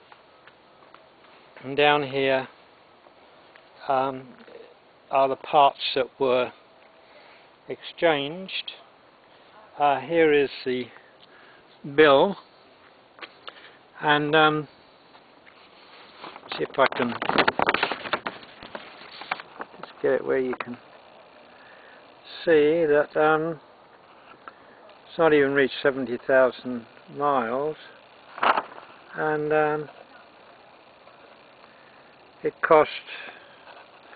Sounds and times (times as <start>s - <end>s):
Speech: 1.6s - 2.5s, 3.8s - 6.6s, 7.7s - 8.9s, 9.6s - 11.0s, 11.8s - 12.4s, 14.0s - 14.7s, 16.5s - 17.2s, 19.9s - 20.8s, 22.3s - 23.6s, 25.1s - 28.0s, 29.1s - 30.4s, 32.4s - 33.4s.